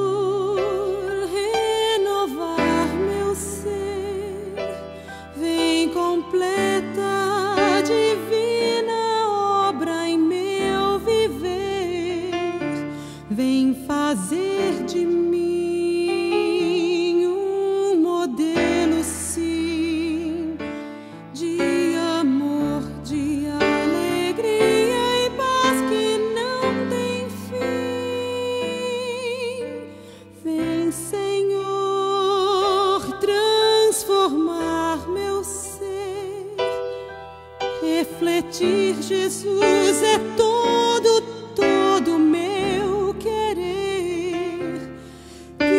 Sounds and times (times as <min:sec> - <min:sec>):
Christmas music: 0:00.0 - 0:45.7
Gospel music: 0:00.0 - 0:45.7.